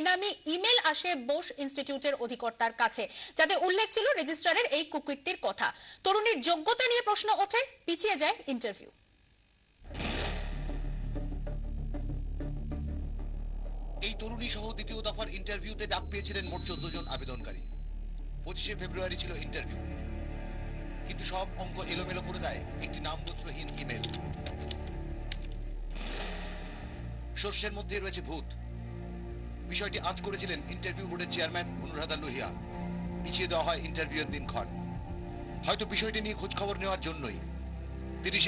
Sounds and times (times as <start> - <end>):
Speech: 0.0 - 9.0, 14.0 - 17.6, 21.1 - 24.1, 27.4 - 28.6, 38.2 - 38.4
Music: 9.9 - 38.4.